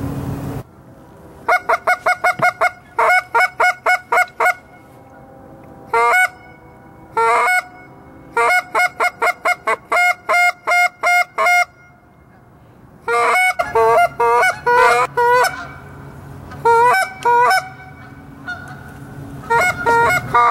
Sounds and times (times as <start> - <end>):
Duck: 16.6 - 20.5.